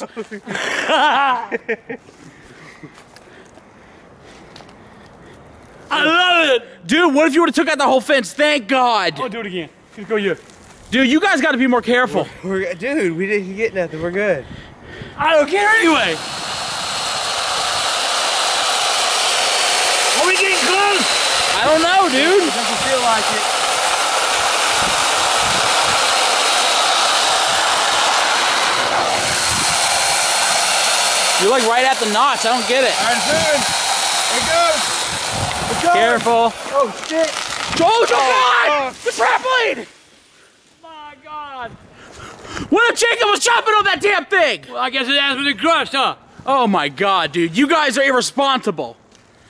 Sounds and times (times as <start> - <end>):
Outside, rural or natural: 0.0 - 45.4
Speech: 5.9 - 14.4, 20.2 - 23.4, 31.4 - 33.6, 35.7 - 39.9, 42.7 - 49.0.